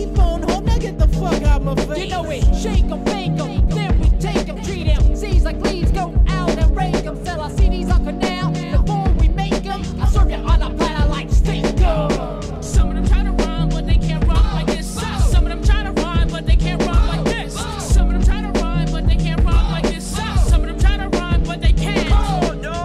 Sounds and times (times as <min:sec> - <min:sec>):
Funk: 0:00.0 - 0:22.8.